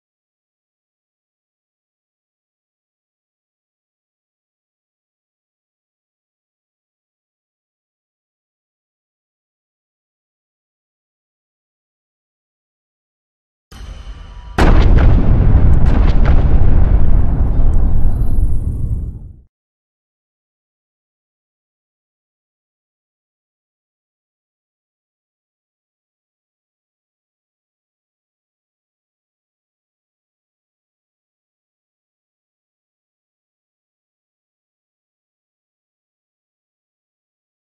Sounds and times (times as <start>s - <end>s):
Music: 13.7s - 15.0s.